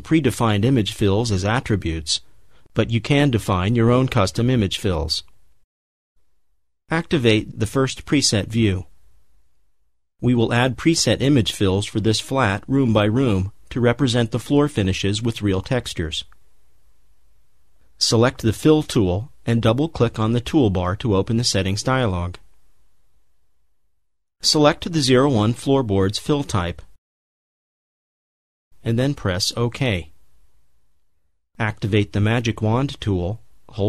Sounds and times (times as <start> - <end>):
Speech: 0.0 - 5.4, 6.9 - 8.9, 10.2 - 16.4, 18.0 - 22.5, 24.4 - 27.0, 28.8 - 30.2, 31.6 - 33.8.